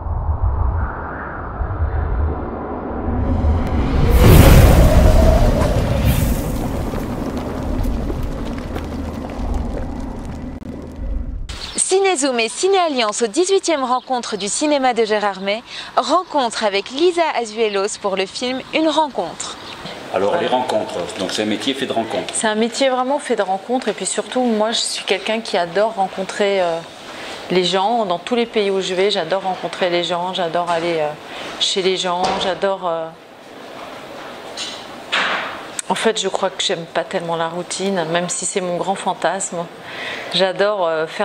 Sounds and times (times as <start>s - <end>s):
Speech: 11.8s - 26.9s, 27.5s - 33.2s, 35.8s - 39.7s, 40.4s - 41.2s.